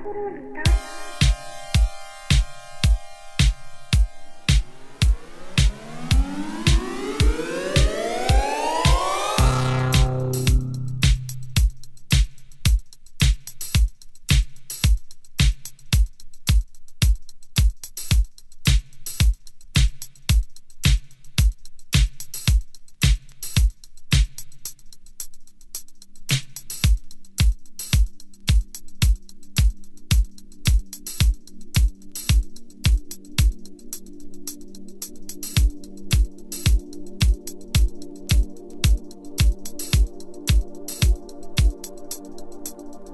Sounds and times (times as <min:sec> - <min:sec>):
Music: 0:00.0 - 0:43.1.